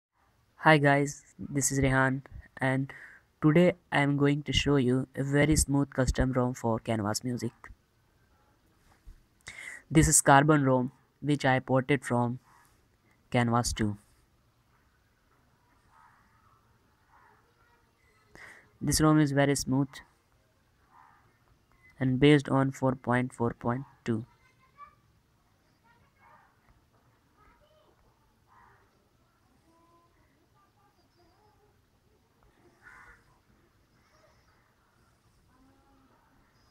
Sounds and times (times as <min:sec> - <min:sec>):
Inside, small room: 0:00.1 - 0:36.7
Speech: 0:00.6 - 0:07.8, 0:09.8 - 0:12.4, 0:13.3 - 0:14.0, 0:18.8 - 0:20.1, 0:22.0 - 0:24.4.